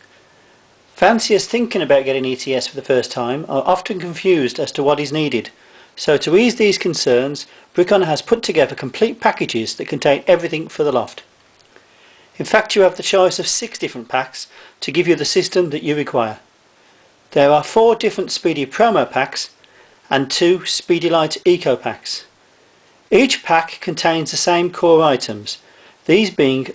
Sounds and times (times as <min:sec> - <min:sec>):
Inside, small room: 0:00.0 - 0:26.7
Speech: 0:01.0 - 0:11.3, 0:12.4 - 0:16.5, 0:17.3 - 0:22.4, 0:23.1 - 0:26.7.